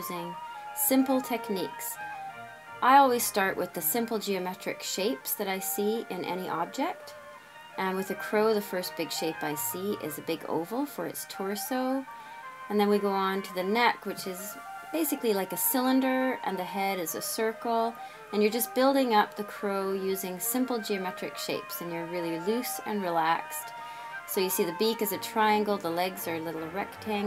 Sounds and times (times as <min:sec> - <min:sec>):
Speech: 0:00.0 - 0:02.0, 0:02.8 - 0:07.1, 0:07.8 - 0:12.0, 0:12.7 - 0:23.7, 0:24.3 - 0:27.2
Music: 0:00.0 - 0:27.2.